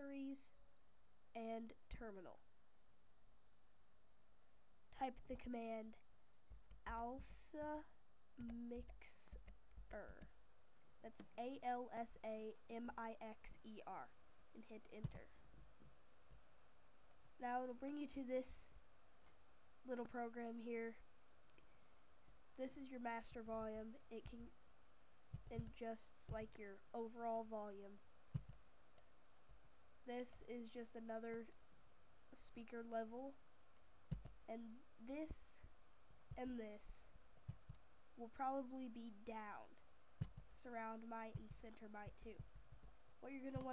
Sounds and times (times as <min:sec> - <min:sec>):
Speech: 0:00.0 - 0:00.6, 0:01.3 - 0:02.4, 0:04.9 - 0:06.1, 0:06.8 - 0:10.4, 0:11.0 - 0:15.4, 0:17.4 - 0:18.8, 0:19.8 - 0:21.0, 0:22.6 - 0:24.6, 0:25.5 - 0:28.0, 0:30.0 - 0:31.6, 0:32.3 - 0:33.4, 0:34.5 - 0:35.7, 0:36.4 - 0:37.1, 0:38.2 - 0:39.8, 0:40.5 - 0:42.4, 0:43.2 - 0:43.7.